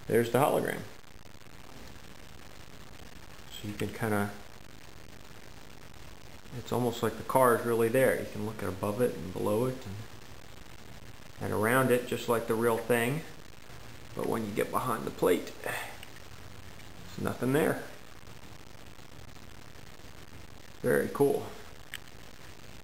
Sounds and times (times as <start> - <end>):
Speech: 0.1 - 0.9, 3.5 - 4.4, 6.5 - 10.1, 11.4 - 13.3, 14.2 - 16.0, 17.1 - 18.0, 20.8 - 21.6.